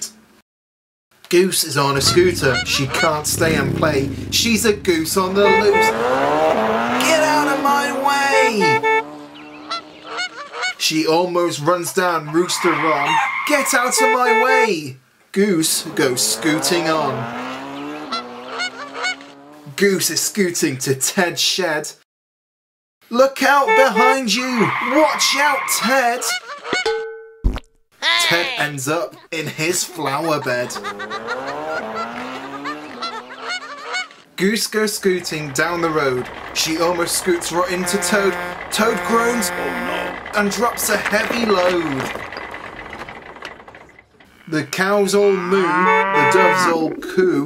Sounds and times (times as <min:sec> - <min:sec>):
Speech: 0:01.3 - 0:06.0, 0:07.0 - 0:08.8, 0:10.8 - 0:17.2, 0:19.7 - 0:22.0, 0:23.1 - 0:26.4, 0:28.0 - 0:30.8, 0:34.4 - 0:42.1, 0:44.5 - 0:47.4
Honk: 0:09.6 - 0:10.8, 0:18.0 - 0:19.3, 0:26.2 - 0:26.9, 0:31.9 - 0:34.2.